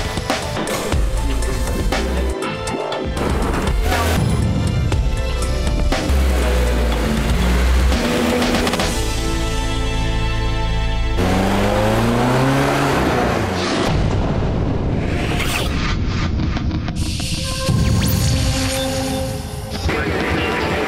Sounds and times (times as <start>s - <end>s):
Music: 0.0s - 20.8s
Vehicle: 5.6s - 17.0s.